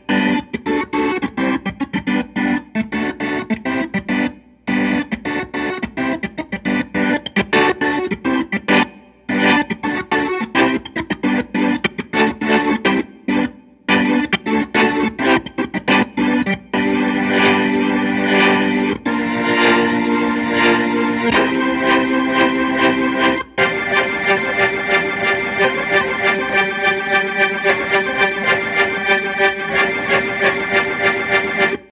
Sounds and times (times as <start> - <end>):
Music: 0.0 - 31.9.